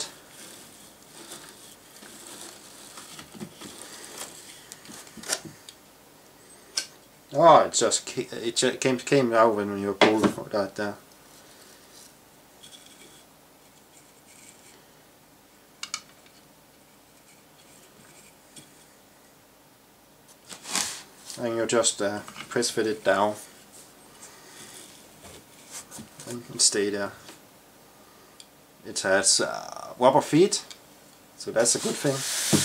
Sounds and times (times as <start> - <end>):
Inside, small room: 0.0 - 32.6
Speech: 7.3 - 11.0, 21.4 - 23.5, 26.2 - 27.2, 28.8 - 30.8, 31.4 - 32.3.